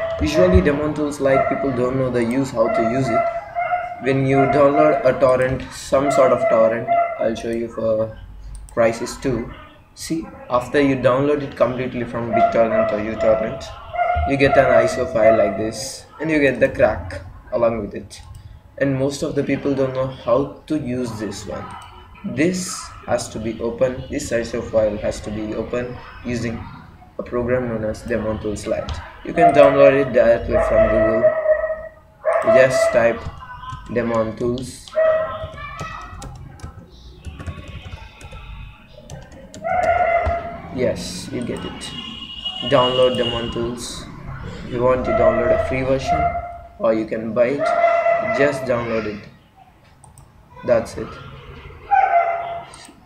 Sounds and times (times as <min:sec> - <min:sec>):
Speech: 0:00.2 - 0:03.3, 0:04.0 - 0:31.3, 0:32.4 - 0:39.6, 0:40.7 - 0:49.4, 0:50.6 - 0:51.6.